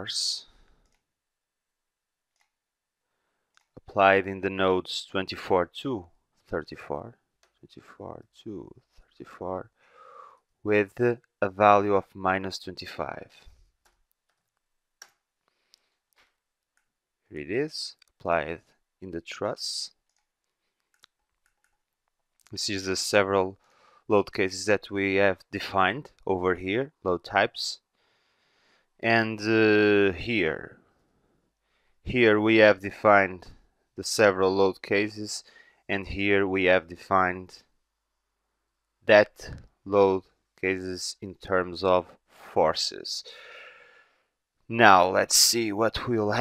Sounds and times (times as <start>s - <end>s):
Speech: 0.0s - 0.5s, 3.8s - 9.7s, 10.7s - 13.5s, 17.3s - 20.0s, 22.5s - 27.8s, 29.0s - 30.8s, 32.1s - 37.7s, 39.0s - 43.5s, 44.7s - 46.4s.